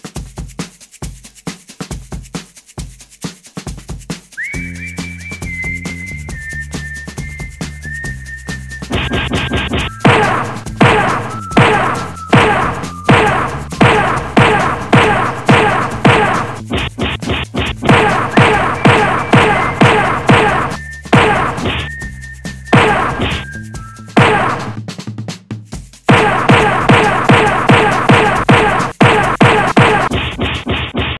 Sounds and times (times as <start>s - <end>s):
Music: 0.0s - 31.1s.